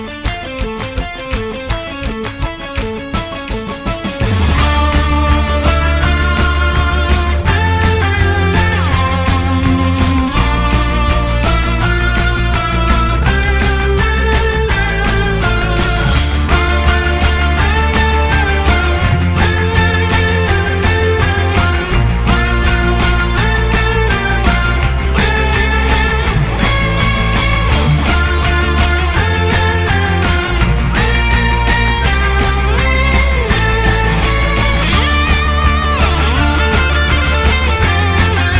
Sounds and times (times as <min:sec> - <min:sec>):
Video game music: 0:00.1 - 0:38.5.